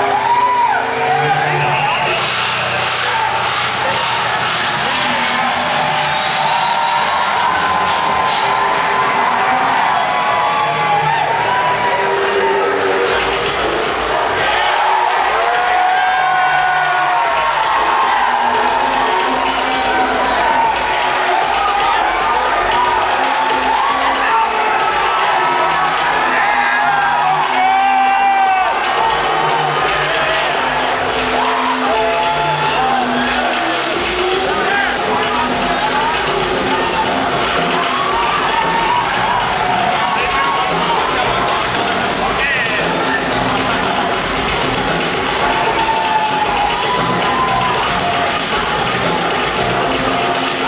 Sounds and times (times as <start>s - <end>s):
Music: 0.0s - 50.6s.